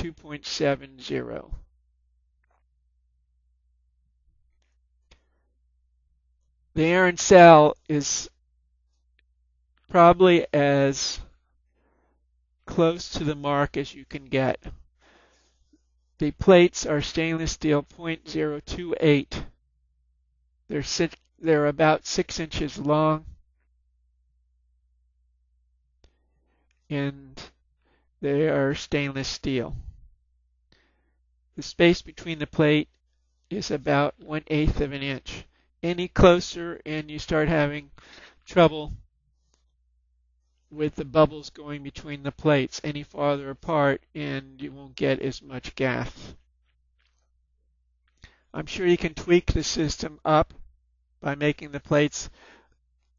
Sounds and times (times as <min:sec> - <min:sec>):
Speech: 0:00.0 - 0:01.7, 0:06.8 - 0:08.4, 0:09.9 - 0:11.4, 0:12.7 - 0:14.8, 0:16.2 - 0:19.6, 0:20.7 - 0:23.4, 0:26.9 - 0:27.6, 0:28.2 - 0:30.0, 0:31.6 - 0:32.9, 0:33.5 - 0:39.0, 0:40.8 - 0:46.4, 0:48.5 - 0:50.6, 0:51.2 - 0:52.4.